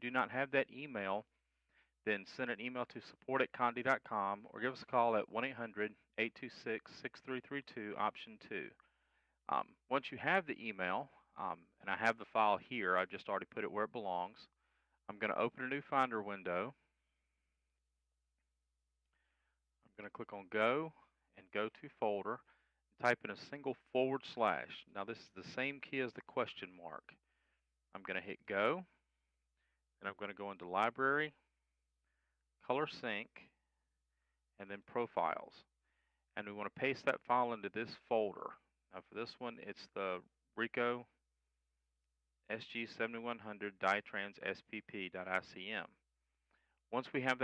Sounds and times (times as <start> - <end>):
Speech: 0.0 - 1.3, 2.0 - 8.8, 9.5 - 16.9, 20.0 - 27.2, 27.9 - 29.0, 30.0 - 31.5, 32.6 - 33.6, 34.6 - 35.7, 36.4 - 41.2, 42.5 - 46.0, 46.9 - 47.4.